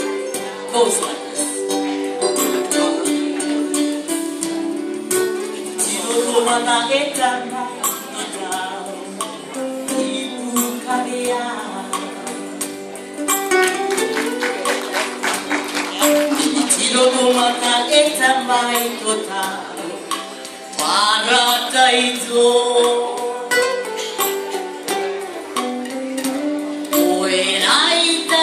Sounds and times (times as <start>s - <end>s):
Female singing: 0.0s - 4.2s, 5.6s - 12.5s, 16.3s - 20.1s, 20.8s - 24.1s, 26.9s - 28.4s
Music: 0.0s - 28.4s.